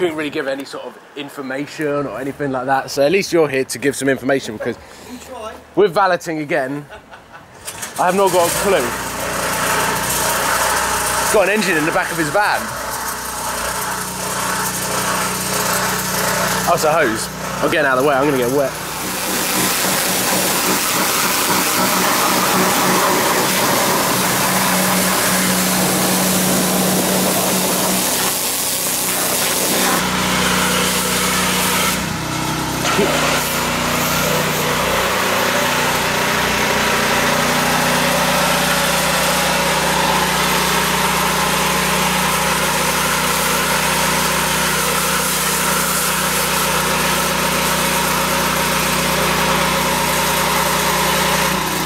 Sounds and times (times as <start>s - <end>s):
Outside, urban or manmade: 0.0s - 51.8s
Engine: 7.0s - 51.8s.